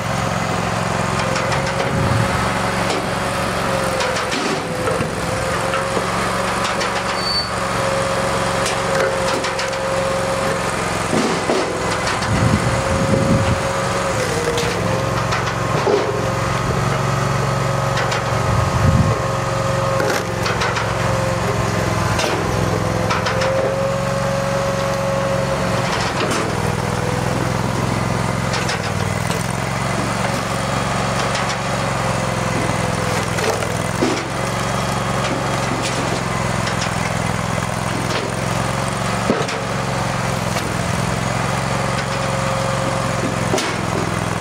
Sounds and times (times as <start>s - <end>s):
Wood: 11.1s - 12.4s, 42.8s - 44.4s.